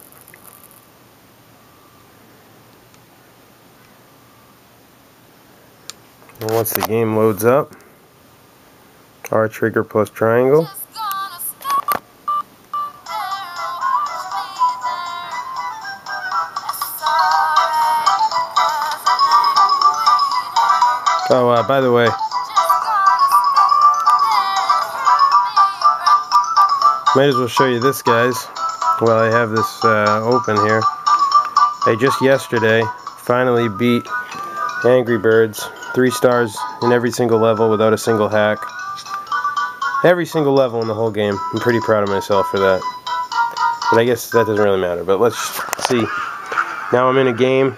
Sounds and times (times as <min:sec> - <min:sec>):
Speech: 0:09.3 - 0:11.6, 0:27.2 - 0:30.8, 0:31.9 - 0:34.0, 0:40.0 - 0:42.8, 0:43.9 - 0:46.1, 0:46.9 - 0:47.7
Music: 0:12.8 - 0:47.5.